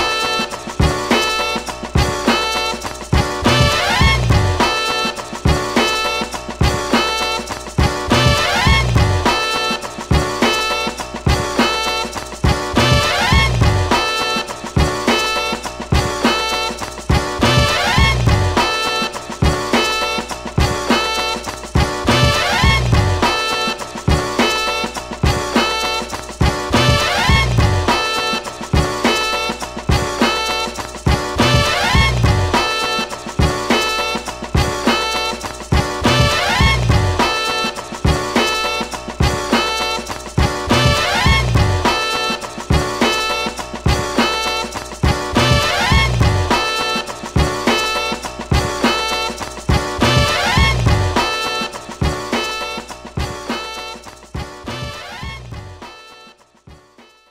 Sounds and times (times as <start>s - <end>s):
Music: 0.0s - 57.3s.